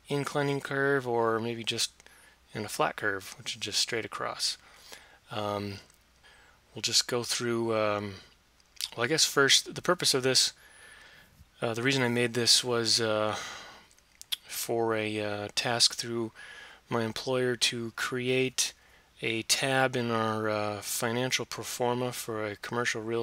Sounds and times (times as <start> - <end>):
Speech: 0.1 - 4.6, 5.3 - 5.9, 6.8 - 10.6, 11.6 - 13.5, 14.4 - 23.2.